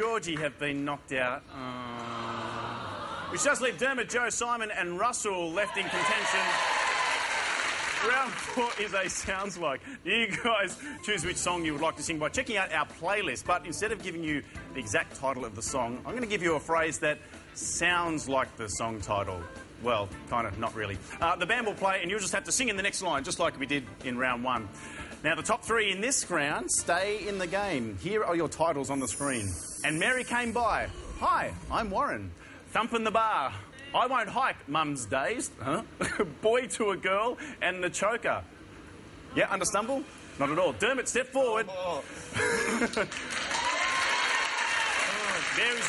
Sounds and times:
Speech: 8.0 - 38.5
Music: 10.0 - 31.4.

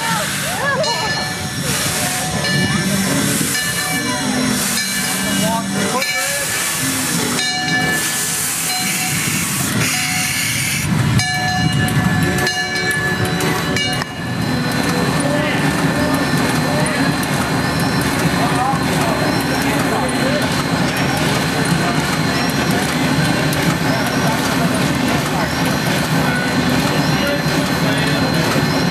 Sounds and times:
Railroad car, train wagon: 0.0 - 28.9
Train: 0.0 - 28.9.

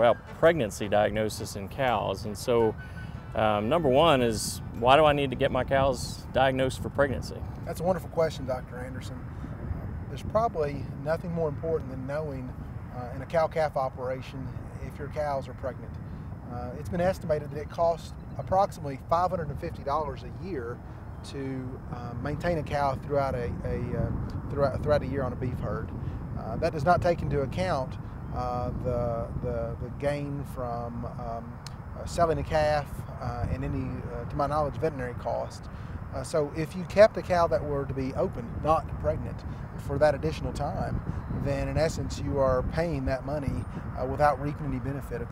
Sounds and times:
Speech: 0.0 - 2.8, 3.4 - 9.2, 10.1 - 45.3.

